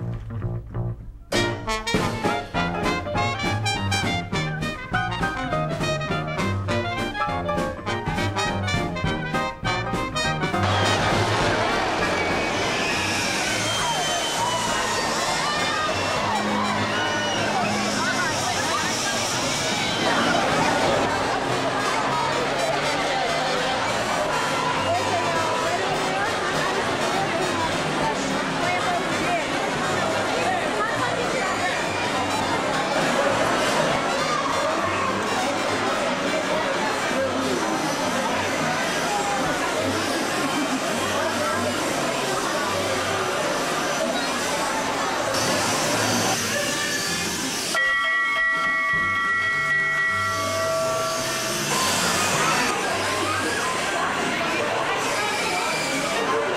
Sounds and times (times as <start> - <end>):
Music: 0.0 - 56.3
Speech: 2.2 - 47.6, 51.7 - 56.5.